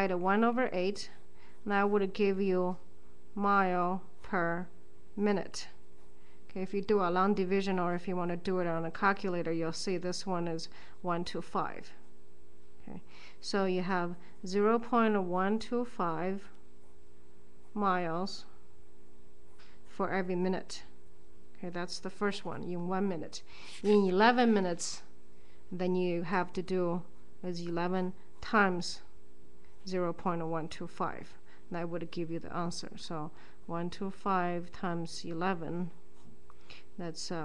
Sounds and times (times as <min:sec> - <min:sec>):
Speech: 0:00.0 - 0:02.8, 0:03.4 - 0:05.8, 0:06.5 - 0:12.0, 0:12.8 - 0:16.5, 0:17.8 - 0:18.5, 0:20.0 - 0:20.9, 0:21.6 - 0:25.1, 0:25.8 - 0:29.1, 0:29.9 - 0:36.0, 0:37.0 - 0:37.4
Inside, small room: 0:00.0 - 0:37.4.